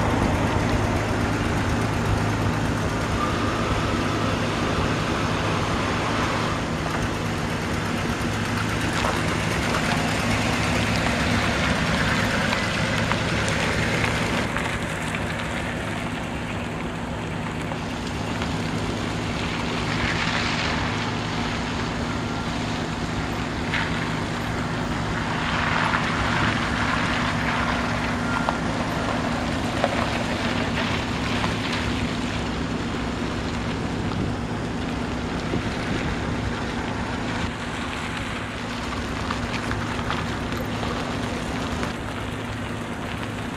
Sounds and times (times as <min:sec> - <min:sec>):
Truck: 0:00.0 - 0:43.5.